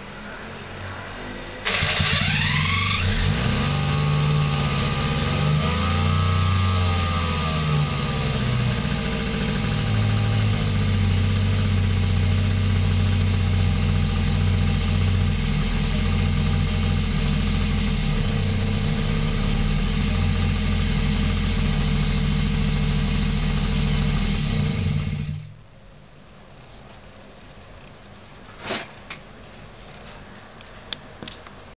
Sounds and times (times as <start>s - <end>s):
Medium engine (mid frequency): 0.0s - 25.8s.